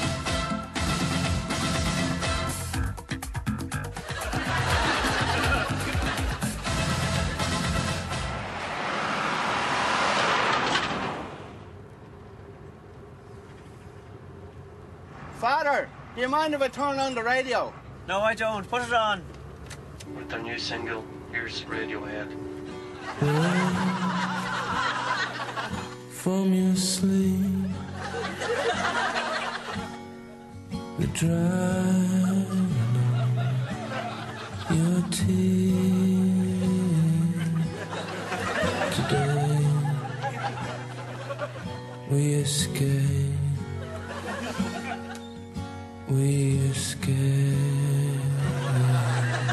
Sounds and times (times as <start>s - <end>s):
Laughter: 4.0s - 6.7s, 23.0s - 26.0s, 27.4s - 30.0s, 32.1s - 42.0s, 43.8s - 45.4s, 48.2s - 49.5s.